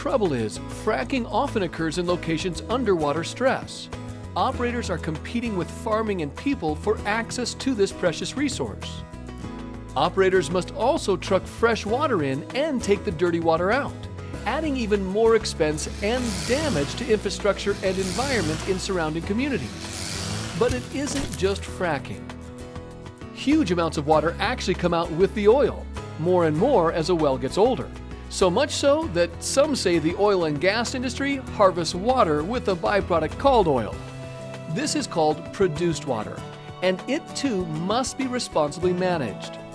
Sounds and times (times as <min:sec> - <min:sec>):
Speech: 0:00.0 - 0:09.0, 0:10.0 - 0:19.7, 0:20.6 - 0:22.2, 0:23.4 - 0:34.0, 0:34.7 - 0:39.6
Music: 0:00.0 - 0:39.7.